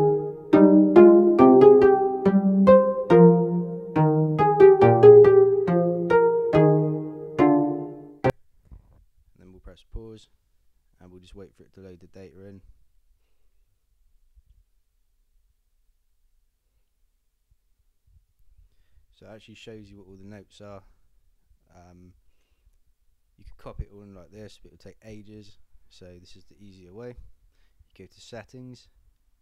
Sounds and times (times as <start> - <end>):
Music: 0.0 - 8.3
Speech: 9.4 - 10.4, 11.0 - 12.7, 19.1 - 20.9, 21.7 - 22.2, 23.4 - 27.3, 27.9 - 29.0.